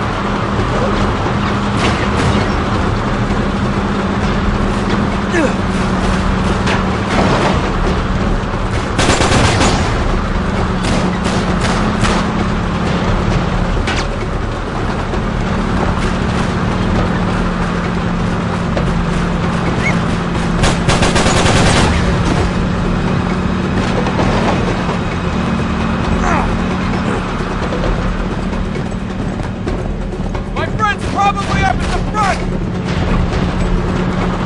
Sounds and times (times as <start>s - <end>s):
Truck: 0.0s - 34.4s.